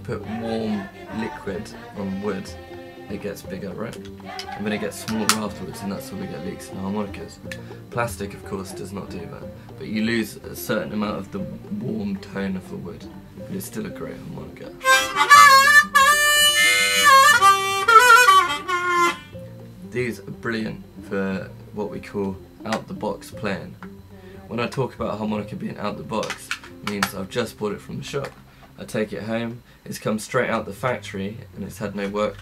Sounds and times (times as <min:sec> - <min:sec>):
Speech: 0:00.0 - 0:04.0, 0:04.6 - 0:07.4, 0:08.0 - 0:14.8, 0:20.0 - 0:32.4
Harmonica: 0:00.0 - 0:12.5, 0:14.6 - 0:20.0
Inside, small room: 0:00.0 - 0:32.4.